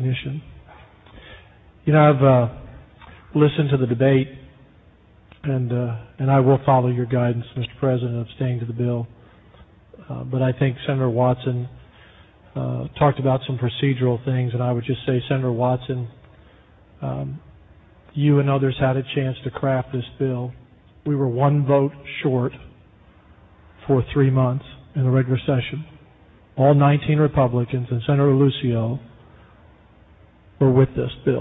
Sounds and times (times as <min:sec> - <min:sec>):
Male speech, man speaking: 0:00.0 - 0:00.5, 0:01.9 - 0:02.7, 0:03.4 - 0:04.5, 0:05.4 - 0:09.1, 0:10.0 - 0:11.8, 0:12.6 - 0:16.2, 0:17.0 - 0:17.4, 0:18.1 - 0:22.7, 0:23.8 - 0:26.0, 0:26.6 - 0:29.1, 0:30.6 - 0:31.4.